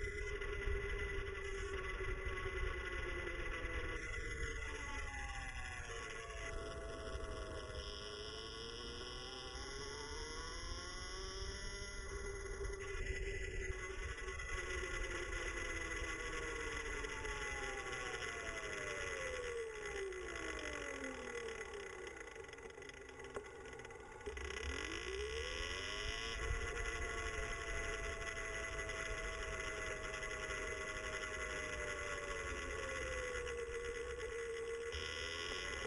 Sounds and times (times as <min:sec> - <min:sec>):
Motorcycle: 0:00.0 - 0:35.8.